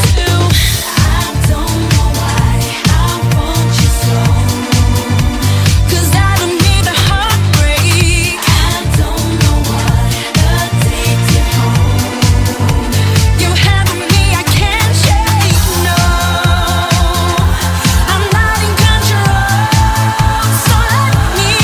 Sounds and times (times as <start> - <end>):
Pop music: 0.0 - 21.6.